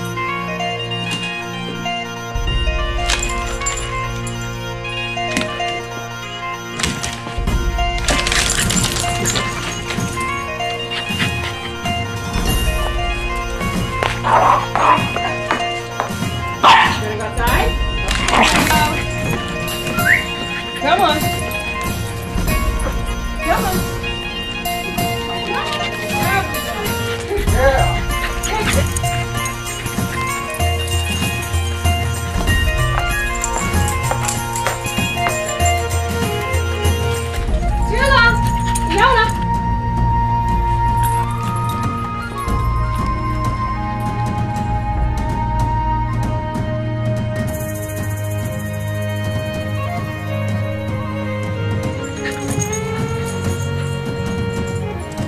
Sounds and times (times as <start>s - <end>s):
Music: 0.0s - 55.2s
Bow-wow: 14.2s - 15.4s, 16.6s - 17.0s
Yip: 16.6s - 17.0s.